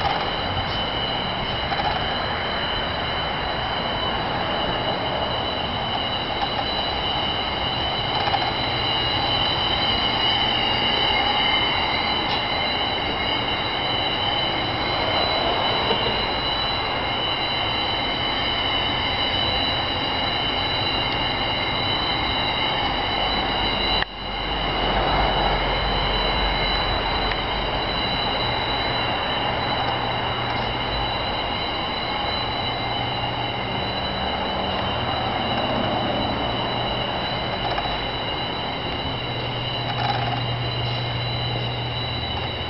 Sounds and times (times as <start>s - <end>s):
Train: 0.0s - 42.7s.